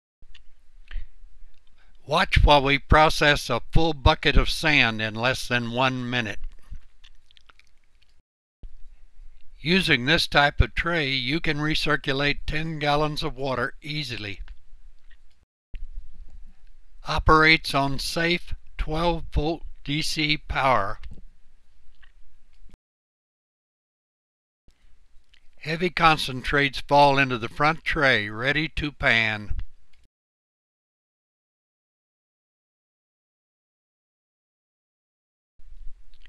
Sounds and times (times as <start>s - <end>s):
Speech: 2.1s - 6.4s, 9.6s - 14.4s, 17.1s - 21.0s, 25.6s - 29.6s.